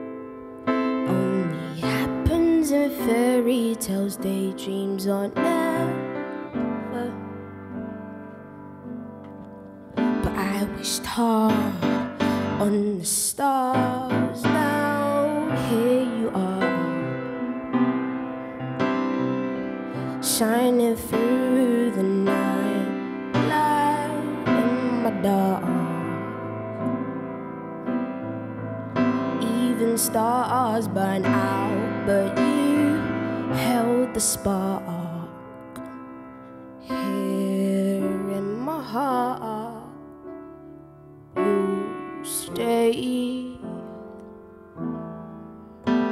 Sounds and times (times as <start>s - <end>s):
Piano: 0.0s - 46.1s.